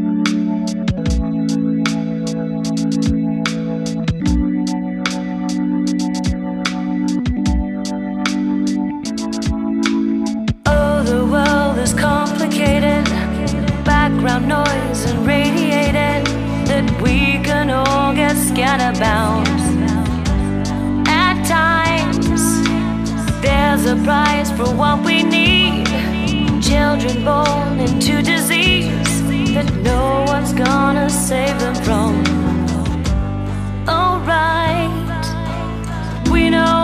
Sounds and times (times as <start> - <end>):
Music: 0.0 - 36.8.